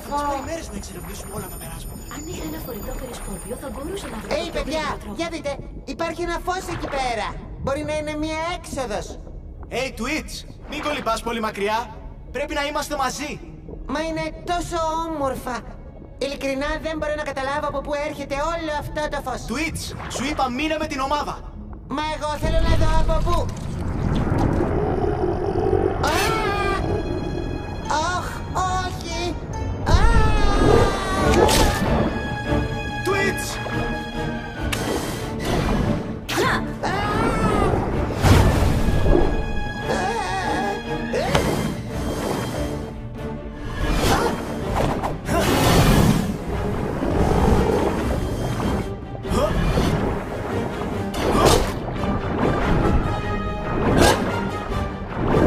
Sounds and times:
Music: 0.0 - 55.4.

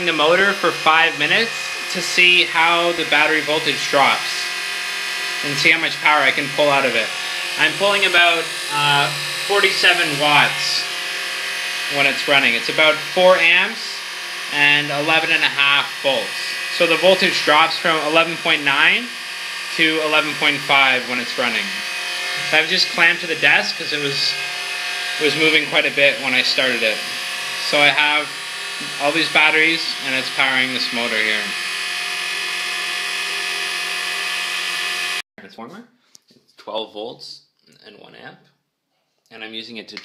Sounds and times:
Speech: 0.0 - 4.4, 5.4 - 10.9, 11.9 - 19.2, 19.8 - 21.8, 22.5 - 24.4, 25.2 - 28.3, 28.9 - 31.6, 35.4 - 35.9, 36.6 - 38.5, 39.3 - 40.0.

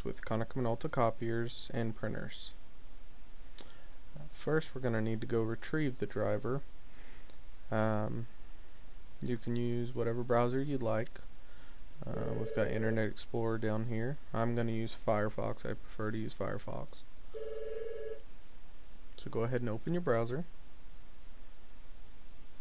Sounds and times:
Speech: 0.0 - 2.6, 4.2 - 6.7, 7.7 - 8.3, 9.2 - 11.2, 12.0 - 17.1, 19.2 - 20.5.

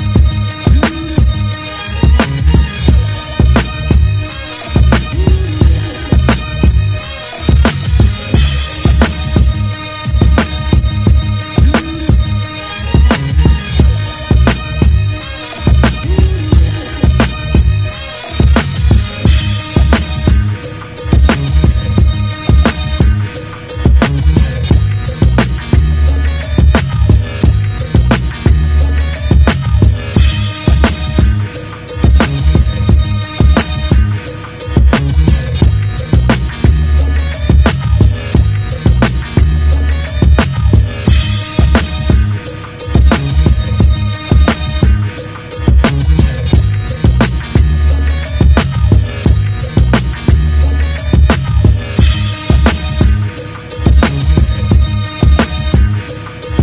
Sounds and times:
Music: 0.0 - 56.6.

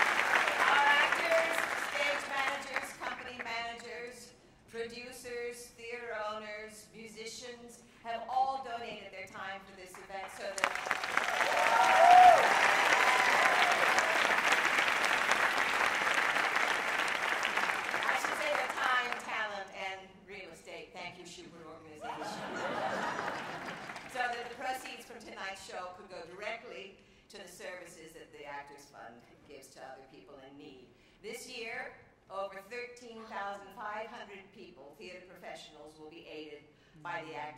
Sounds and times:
Female speech, woman speaking: 0.5 - 10.7, 18.0 - 22.4, 24.1 - 37.5
Narration, monologue: 0.6 - 10.8, 18.0 - 22.5, 24.0 - 37.5.

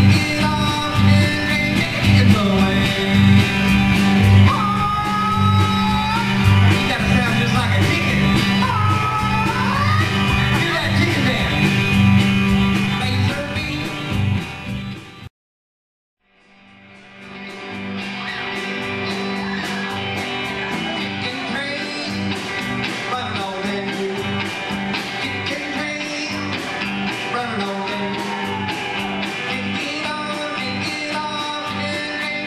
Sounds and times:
Music: 0.0 - 15.3, 16.2 - 32.4.

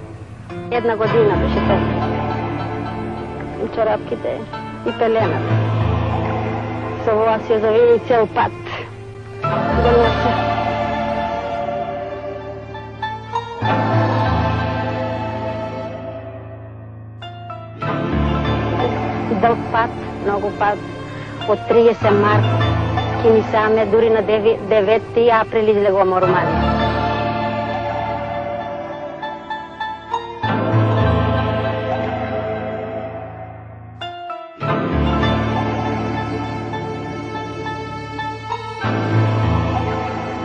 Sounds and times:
Theme music: 0.0 - 40.4
Speech: 0.7 - 1.9, 3.6 - 5.4, 7.1 - 8.6, 18.8 - 20.8, 21.5 - 22.5, 23.2 - 26.6.

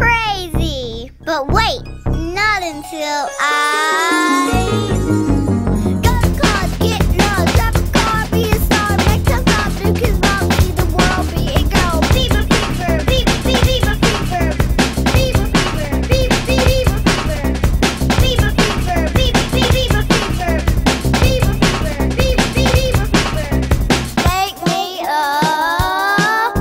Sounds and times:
Music: 0.0 - 26.6.

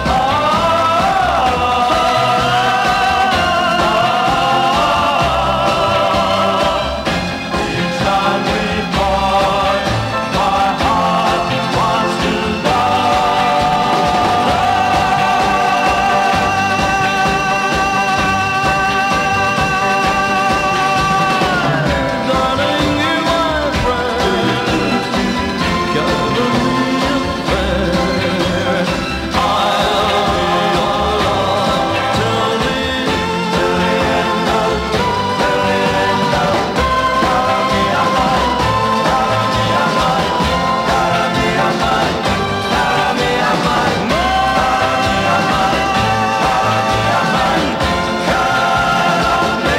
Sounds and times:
Music: 0.0 - 49.7.

